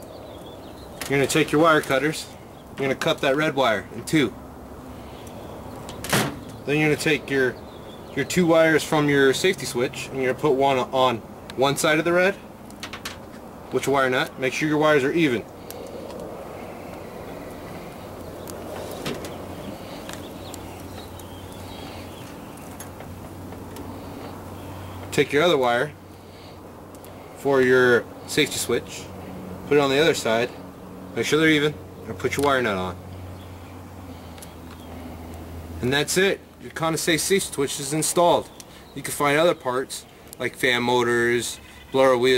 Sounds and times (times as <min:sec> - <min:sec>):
Speech: 0:01.1 - 0:04.4, 0:06.7 - 0:07.6, 0:08.2 - 0:12.4, 0:13.7 - 0:15.5, 0:25.1 - 0:26.0, 0:27.4 - 0:29.1, 0:29.7 - 0:30.6, 0:31.2 - 0:33.0, 0:35.8 - 0:42.3.